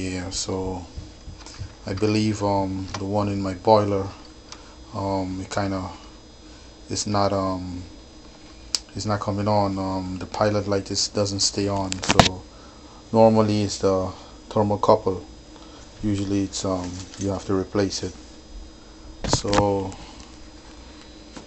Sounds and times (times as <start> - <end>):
Speech: 0.0 - 0.9, 1.8 - 4.2, 4.9 - 6.0, 6.9 - 7.9, 8.9 - 12.4, 13.1 - 15.3, 16.0 - 18.2, 19.3 - 20.0.